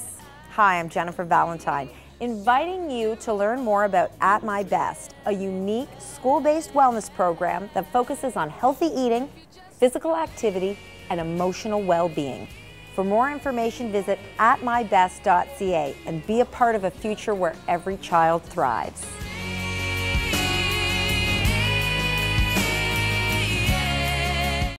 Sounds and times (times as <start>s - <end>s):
Music: 0.0s - 24.7s
Speech: 0.6s - 19.2s.